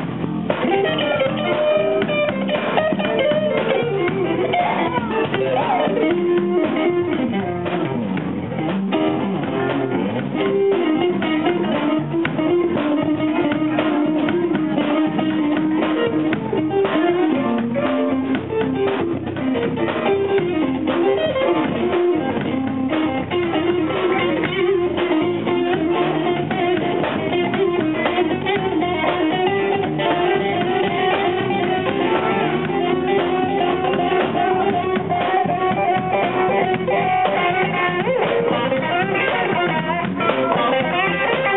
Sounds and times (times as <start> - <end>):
Guitar: 0.0 - 41.5.